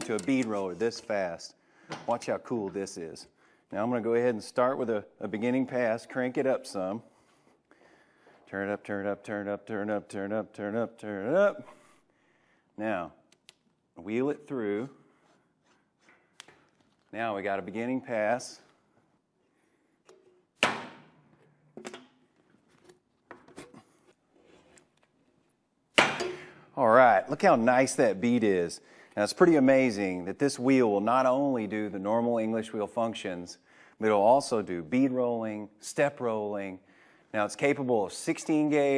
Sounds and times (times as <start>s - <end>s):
Speech: 0.0s - 7.0s, 8.5s - 11.7s, 12.8s - 13.2s, 14.0s - 15.0s, 17.1s - 18.7s, 26.8s - 38.9s.